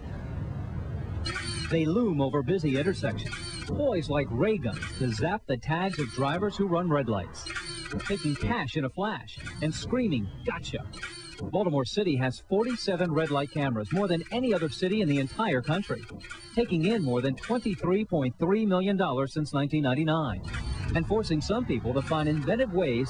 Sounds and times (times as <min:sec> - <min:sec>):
Speech: 0:01.7 - 0:07.4, 0:11.6 - 0:16.0, 0:16.6 - 0:20.4, 0:21.0 - 0:23.0.